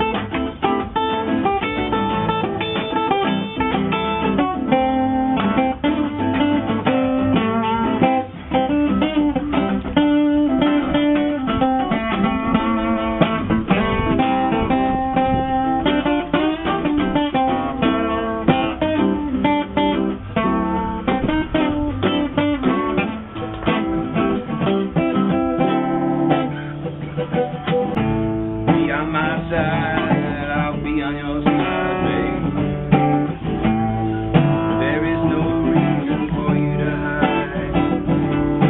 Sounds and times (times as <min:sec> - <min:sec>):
Guitar: 0:00.0 - 0:38.6.